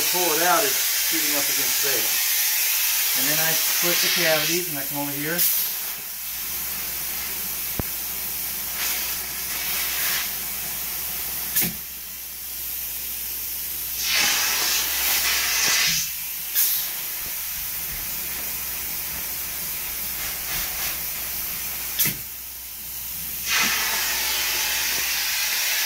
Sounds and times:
Speech: 0.0 - 2.2, 3.2 - 5.5
Spray: 0.0 - 25.8.

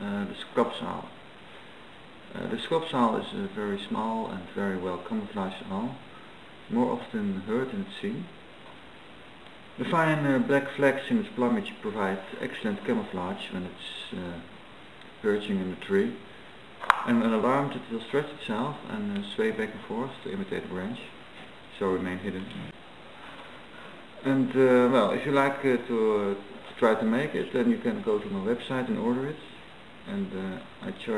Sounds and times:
Speech: 0.0 - 1.2, 2.3 - 6.1, 6.7 - 8.4, 9.8 - 14.5, 15.2 - 16.3, 17.0 - 22.8, 24.2 - 31.1.

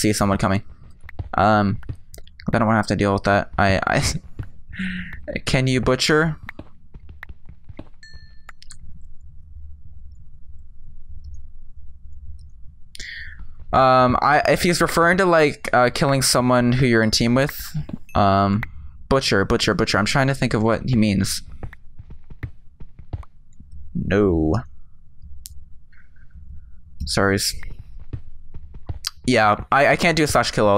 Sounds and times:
Speech: 0.0 - 0.6, 1.4 - 1.8, 2.4 - 4.2, 4.8 - 6.4, 13.0 - 21.4, 24.0 - 24.7, 27.0 - 27.7, 29.1 - 30.7.

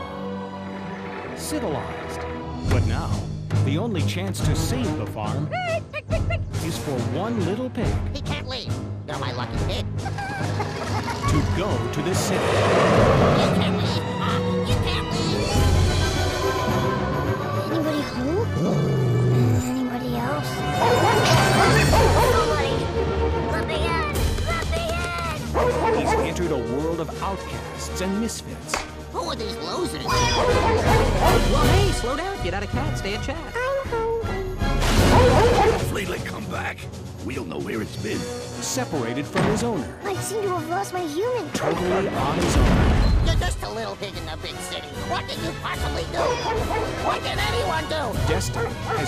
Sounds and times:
Music: 0.0 - 49.0.

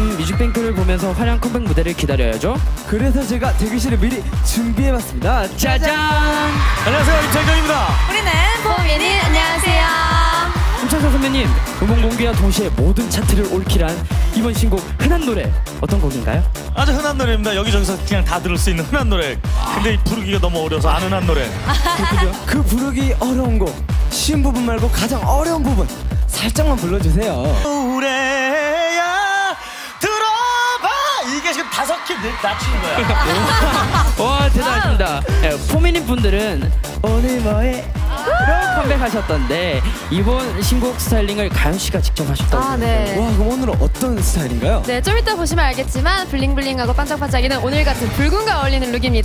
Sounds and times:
Music: 0.0 - 49.2.

